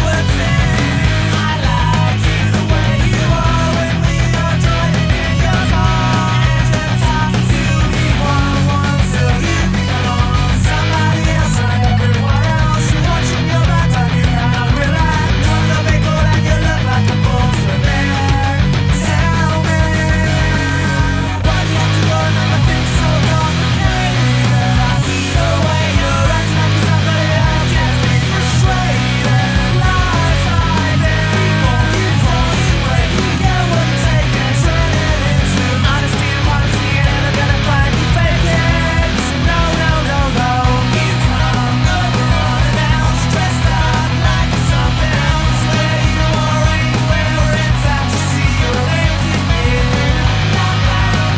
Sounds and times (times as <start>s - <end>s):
Grunge: 0.0s - 51.3s.